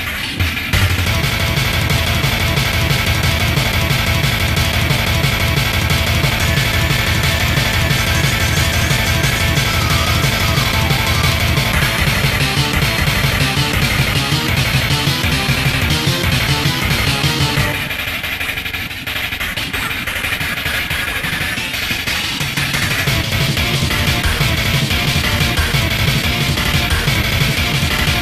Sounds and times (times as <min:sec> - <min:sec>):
Video game music: 0:00.2 - 0:18.5, 0:21.6 - 0:28.2.